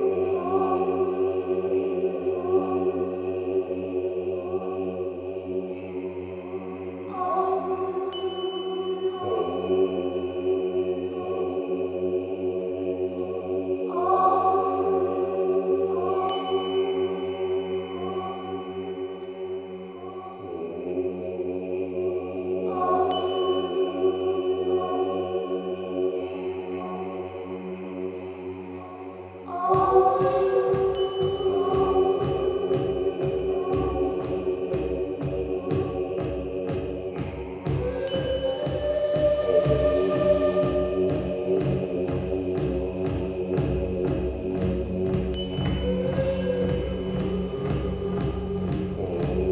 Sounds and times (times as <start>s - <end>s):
Music: 0.0s - 49.5s.